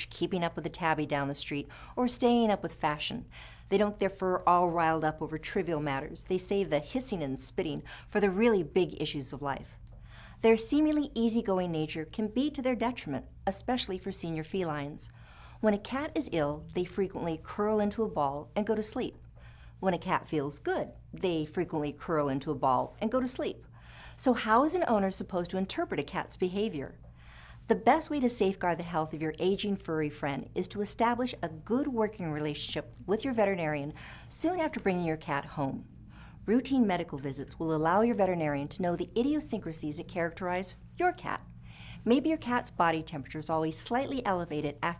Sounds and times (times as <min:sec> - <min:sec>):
Speech: 0:00.0 - 0:09.8, 0:10.4 - 0:19.2, 0:19.8 - 0:23.6, 0:24.2 - 0:27.0, 0:27.7 - 0:44.9.